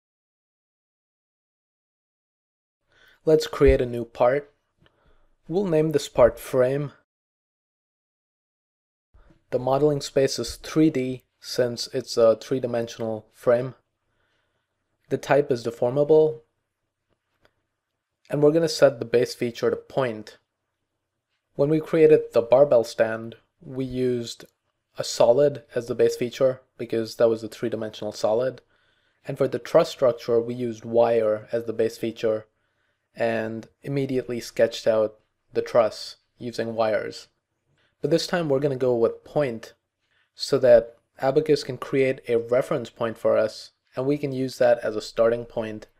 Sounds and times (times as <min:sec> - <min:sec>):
Speech: 0:03.2 - 0:04.5, 0:05.5 - 0:07.1, 0:09.5 - 0:13.8, 0:15.1 - 0:16.5, 0:18.3 - 0:20.4, 0:21.6 - 0:32.5, 0:33.2 - 0:37.4, 0:38.0 - 0:39.8, 0:40.4 - 0:45.9.